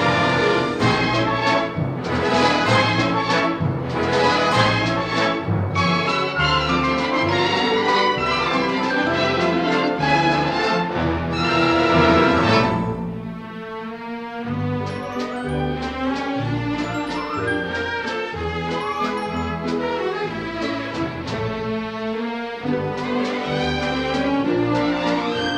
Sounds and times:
Music: 0:00.0 - 0:25.5.

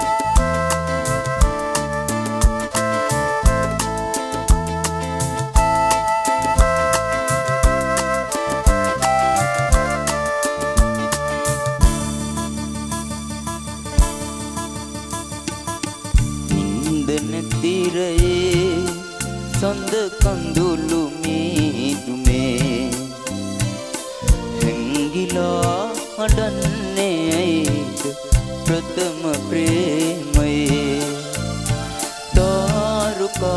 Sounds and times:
Music: 0:00.0 - 0:33.5
Male singing: 0:16.5 - 0:23.3, 0:24.6 - 0:31.5, 0:32.3 - 0:33.5.

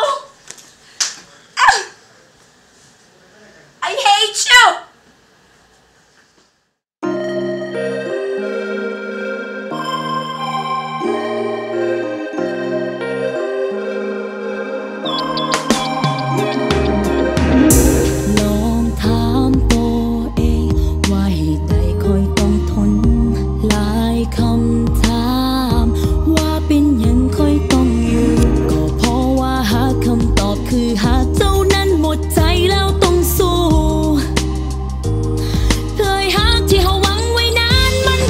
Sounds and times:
Music: 0:07.0 - 0:38.2.

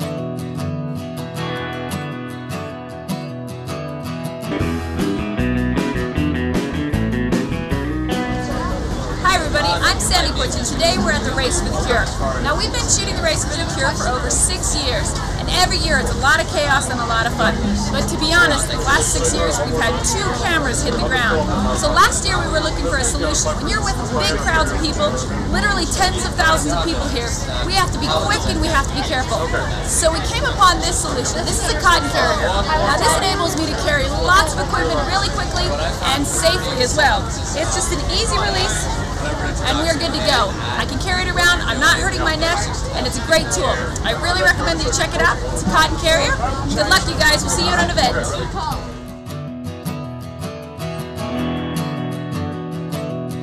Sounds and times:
Speech: 0:08.4 - 0:49.0.

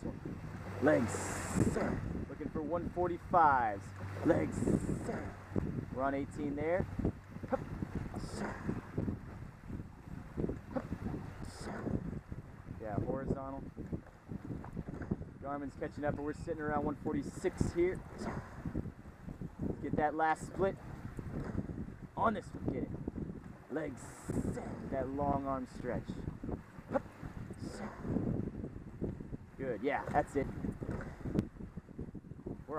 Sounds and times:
Rowboat, canoe, kayak: 0:00.0 - 0:32.7
Speech: 0:00.8 - 0:04.9, 0:06.0 - 0:06.8, 0:12.8 - 0:13.6, 0:15.4 - 0:18.0, 0:19.8 - 0:20.8, 0:22.2 - 0:22.9, 0:23.7 - 0:26.2, 0:29.6 - 0:30.5.

